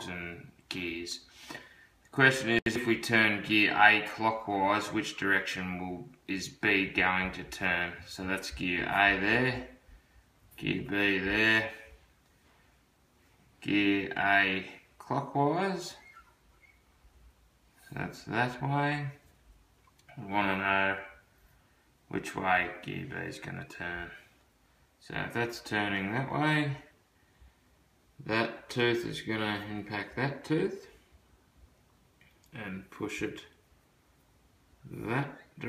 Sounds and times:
Speech: 0.0 - 1.3, 2.1 - 9.8, 10.6 - 12.0, 13.6 - 16.1, 17.8 - 19.2, 20.1 - 21.2, 22.1 - 24.3, 25.0 - 27.0, 28.2 - 31.0, 32.5 - 33.6, 34.8 - 35.6.

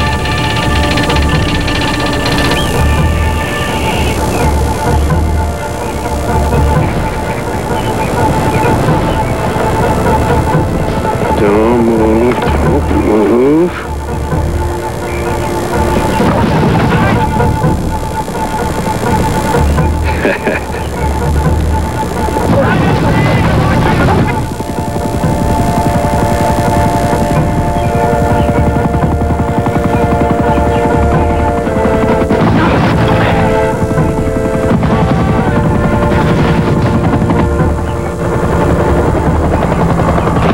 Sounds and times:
Music: 0.0 - 40.5
Speech: 11.3 - 13.9, 22.5 - 24.4, 32.4 - 33.8.

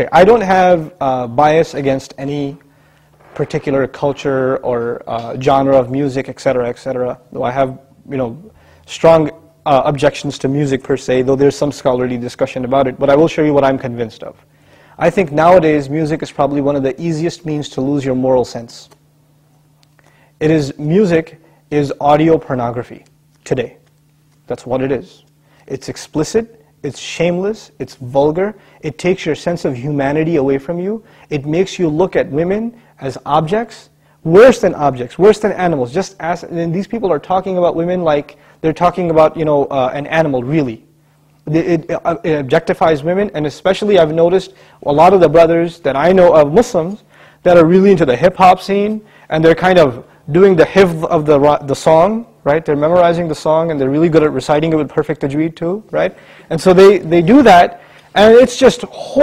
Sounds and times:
Speech: 0.0 - 2.6, 3.3 - 14.4, 15.0 - 19.0, 20.4 - 23.8, 24.5 - 59.2.

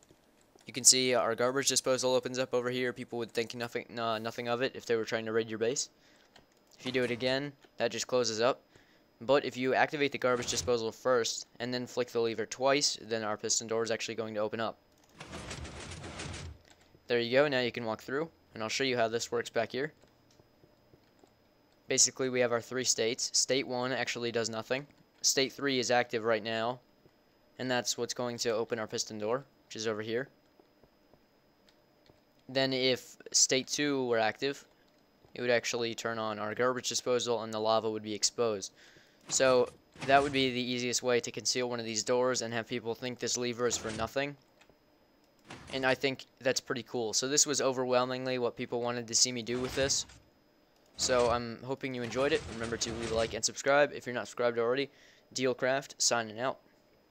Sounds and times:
Speech: 0.7 - 5.9, 6.8 - 8.6, 9.2 - 14.8, 17.1 - 20.0, 21.9 - 26.8, 27.6 - 30.4, 32.5 - 34.7, 35.4 - 38.7, 39.3 - 44.4, 45.7 - 50.1, 51.0 - 56.6.

